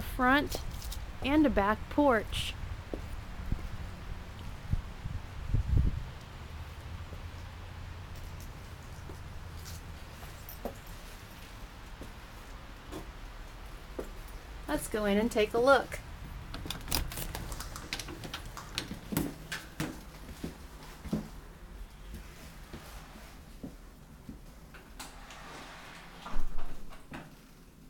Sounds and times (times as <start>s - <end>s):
Speech: 0.0s - 0.6s, 1.2s - 2.6s, 14.7s - 16.0s.